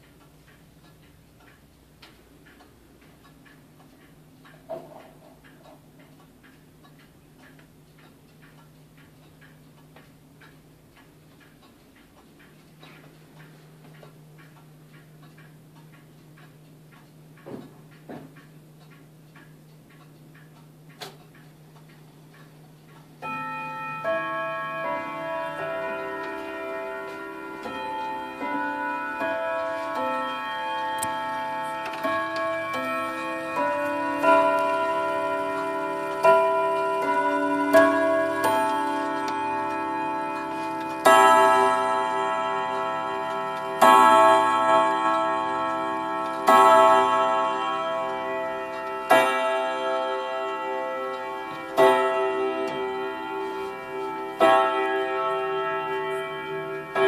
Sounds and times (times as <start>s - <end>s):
Tubular bells: 23.2s - 57.0s.